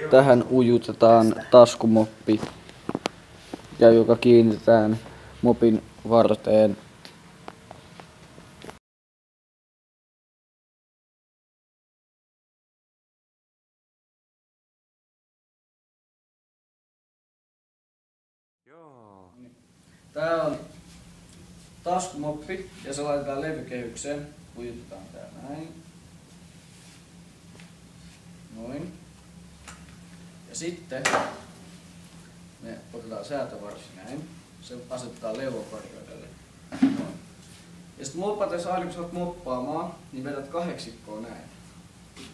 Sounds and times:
Speech: 0.0 - 2.5, 3.8 - 6.8, 18.7 - 19.6, 20.2 - 20.7, 21.8 - 25.8, 28.5 - 29.0, 30.5 - 31.2, 32.6 - 36.4, 38.0 - 41.6.

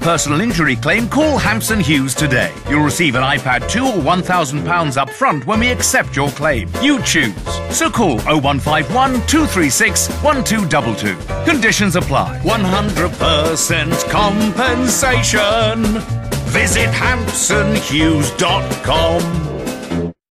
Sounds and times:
Speech: 0.0 - 15.1
Music: 0.0 - 20.3.

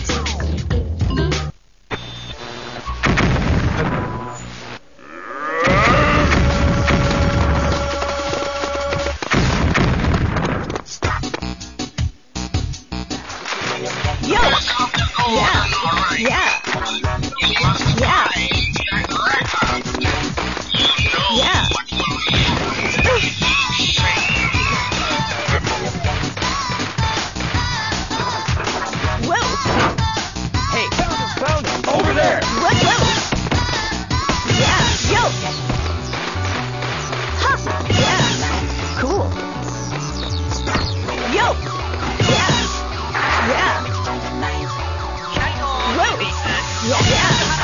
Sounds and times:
Whack, thwack: 8.9 - 11.4, 42.2 - 43.4, 47.0 - 47.6.

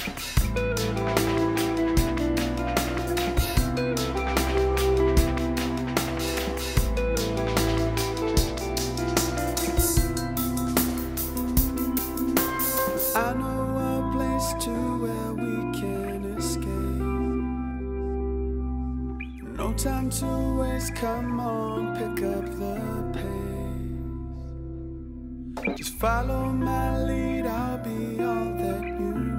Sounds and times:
Music: 0.0 - 29.3.

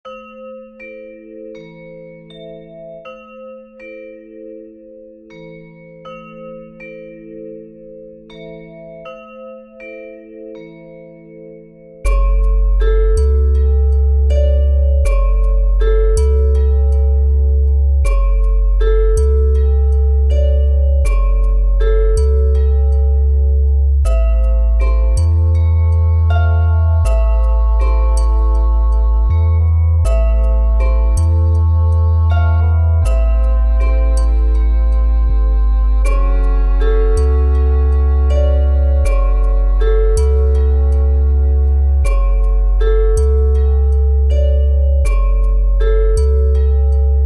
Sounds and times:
Tubular bells: 0.0 - 47.2.

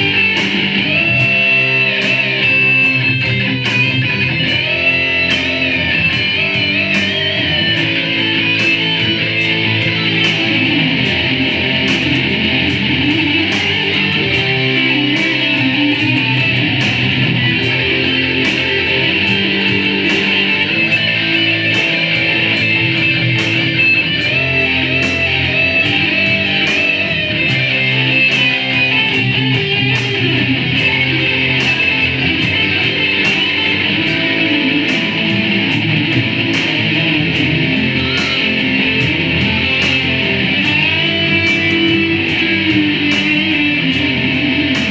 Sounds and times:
Guitar: 0.0 - 44.9.

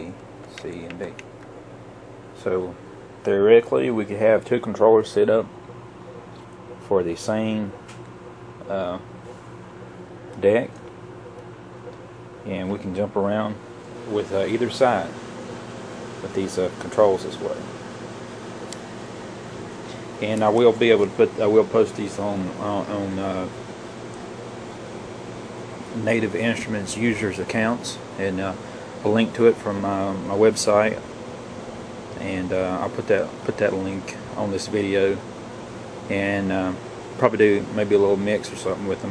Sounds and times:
Speech: 0.0 - 1.2, 2.4 - 5.5, 6.8 - 7.8, 8.6 - 9.1, 10.4 - 10.8, 12.4 - 15.2, 16.2 - 17.7, 20.2 - 23.6, 26.0 - 31.0, 32.2 - 35.2, 36.1 - 39.1.

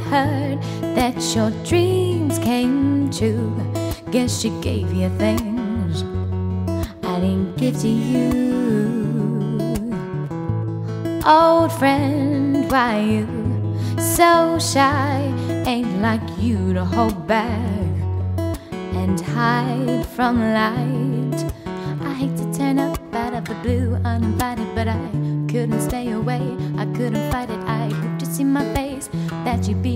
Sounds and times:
Music: 0.0 - 29.9.

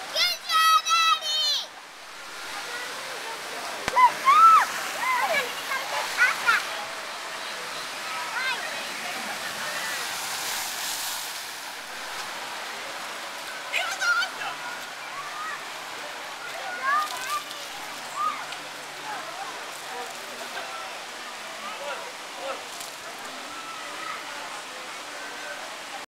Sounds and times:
Water: 0.0 - 26.0.

